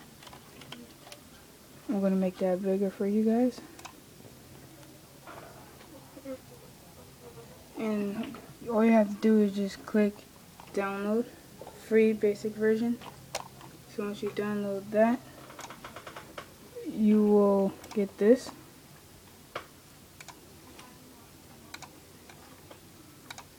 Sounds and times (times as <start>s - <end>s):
Inside, small room: 0.0s - 23.5s
Speech: 1.9s - 3.7s, 7.8s - 13.0s, 13.9s - 15.2s, 16.8s - 18.6s.